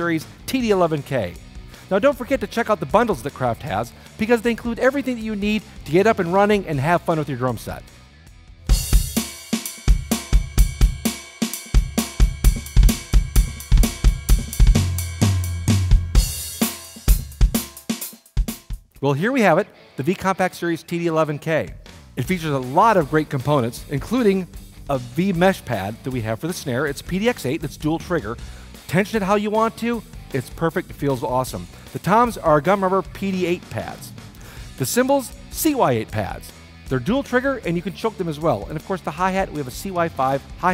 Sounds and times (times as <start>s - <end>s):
Speech: 0.0s - 7.8s, 19.0s - 34.1s, 34.8s - 40.7s
Music: 0.0s - 40.7s.